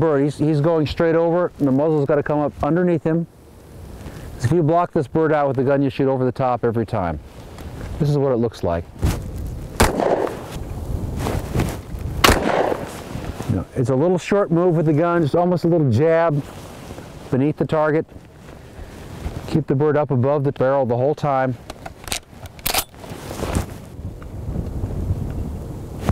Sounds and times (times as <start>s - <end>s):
Speech: 0.0s - 3.3s, 4.4s - 7.2s, 8.0s - 8.9s, 13.5s - 16.5s, 17.3s - 18.1s, 19.4s - 21.6s.